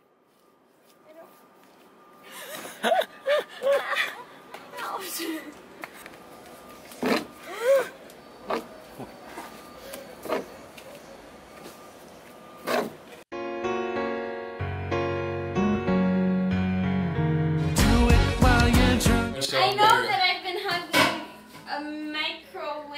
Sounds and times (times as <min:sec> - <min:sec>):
Music: 0:13.3 - 0:19.4.